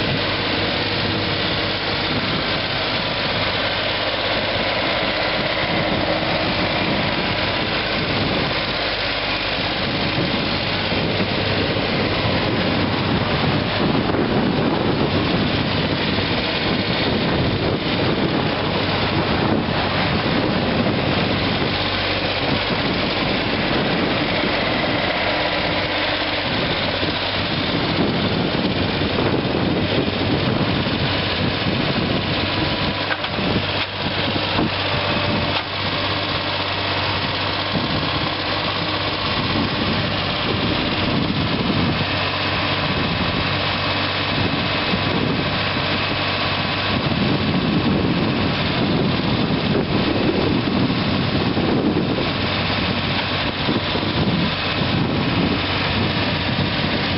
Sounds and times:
Vehicle: 0:00.0 - 0:57.1.

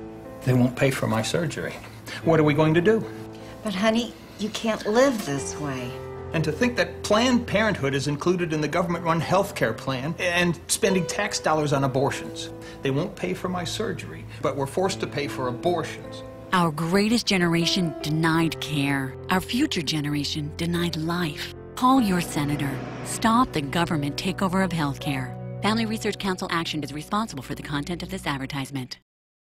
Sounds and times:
Music: 0:00.0 - 0:29.1.

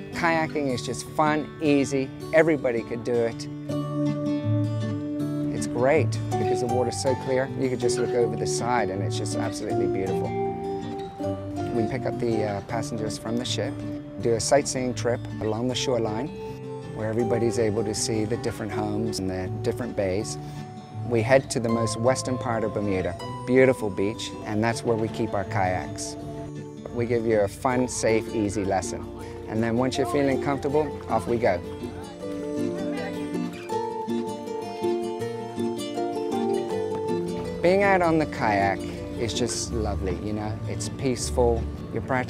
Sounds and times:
Music: 0:00.0 - 0:42.3
Speech: 0:00.2 - 0:03.5, 0:05.6 - 0:10.3, 0:11.7 - 0:16.3, 0:17.0 - 0:20.4, 0:21.1 - 0:26.2, 0:26.9 - 0:31.6, 0:37.6 - 0:42.3.

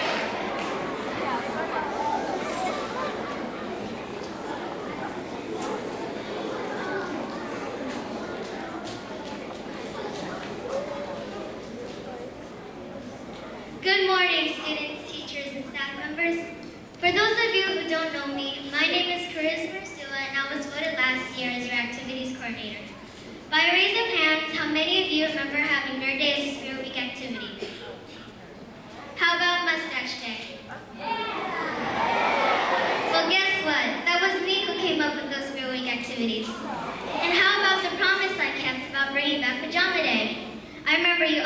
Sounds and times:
Child speech, kid speaking: 0:13.8 - 0:28.3, 0:28.9 - 0:41.4.

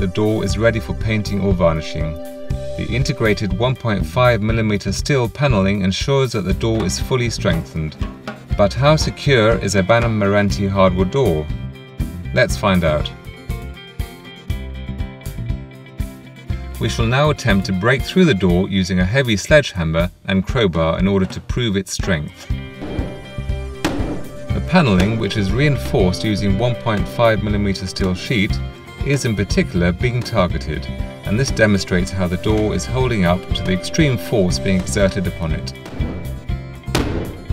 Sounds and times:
Speech: 0:00.0 - 0:02.2, 0:02.8 - 0:11.5, 0:12.3 - 0:13.2, 0:16.8 - 0:22.6, 0:24.5 - 0:35.8
Music: 0:00.0 - 0:37.5.

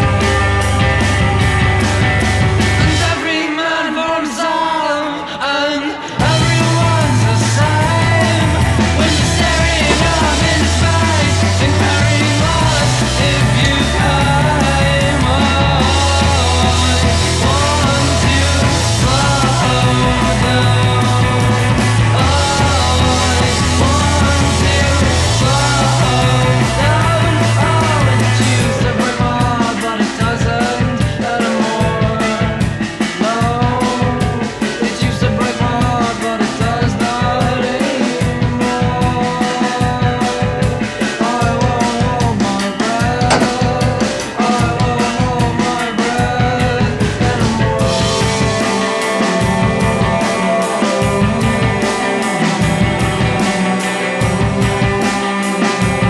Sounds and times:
Independent music: 0:00.0 - 0:56.0.

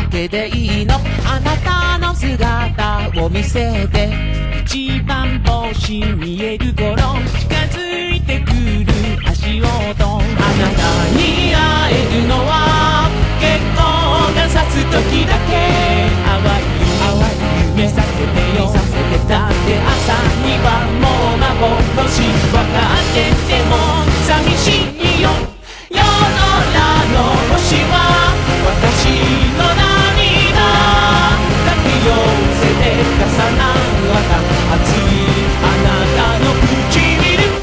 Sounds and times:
Music: 0:00.0 - 0:37.6.

